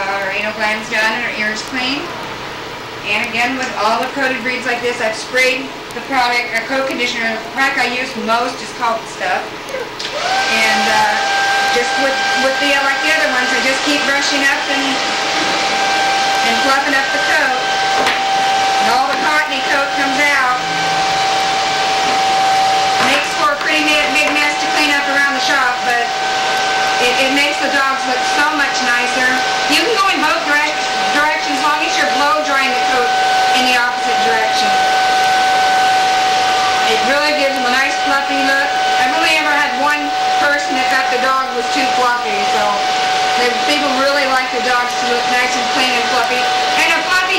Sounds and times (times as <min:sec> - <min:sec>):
Speech: 0:00.0 - 0:02.1, 0:03.0 - 0:15.0, 0:16.4 - 0:17.6, 0:18.8 - 0:20.6, 0:23.0 - 0:26.1, 0:27.0 - 0:34.8, 0:36.9 - 0:42.8, 0:43.4 - 0:47.3.